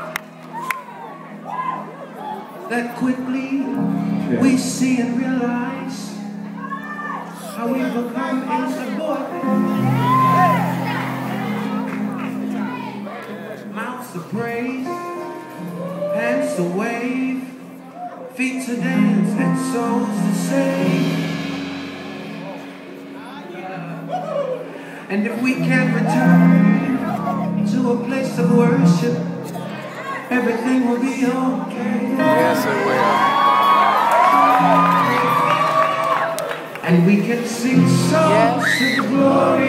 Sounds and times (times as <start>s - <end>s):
Music: 0.0s - 39.6s.